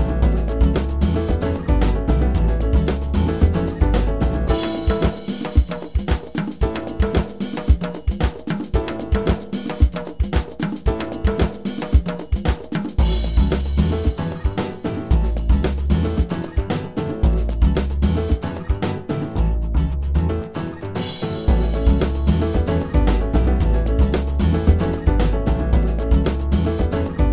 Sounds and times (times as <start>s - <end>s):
Music: 0.0s - 27.3s.